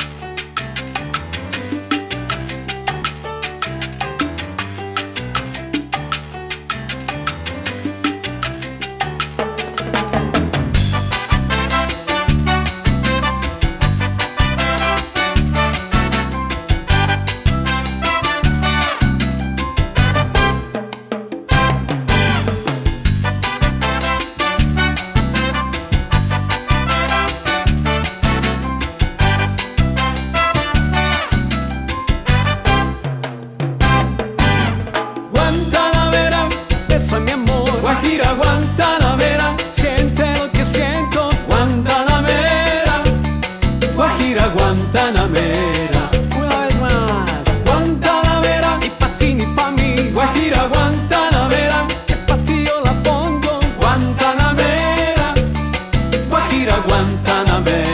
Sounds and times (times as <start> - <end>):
Music: 0.0 - 57.9.